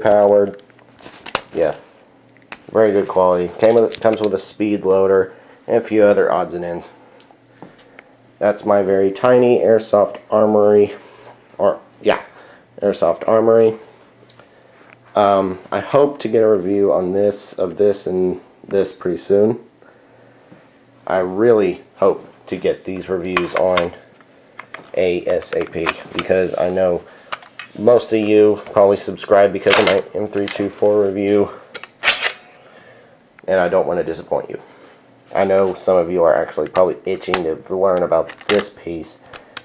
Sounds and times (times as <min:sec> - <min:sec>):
Speech: 0:00.0 - 0:00.6, 0:01.5 - 0:01.9, 0:02.7 - 0:07.0, 0:08.4 - 0:11.0, 0:11.6 - 0:13.8, 0:15.2 - 0:19.7, 0:21.0 - 0:24.1, 0:24.9 - 0:27.1, 0:27.8 - 0:31.7, 0:33.4 - 0:34.7, 0:35.3 - 0:39.2
Inside, small room: 0:00.0 - 0:39.6.